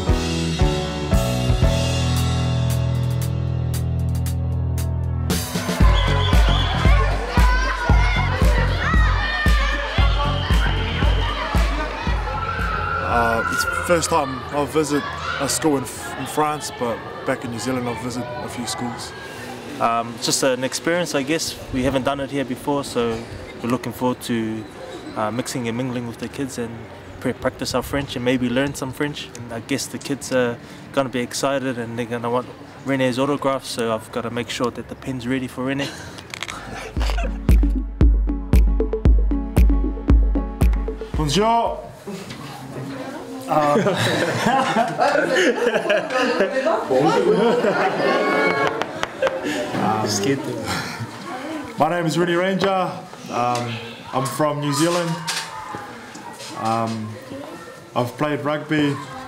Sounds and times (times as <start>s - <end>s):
Music: 0.0s - 13.1s, 37.0s - 41.8s.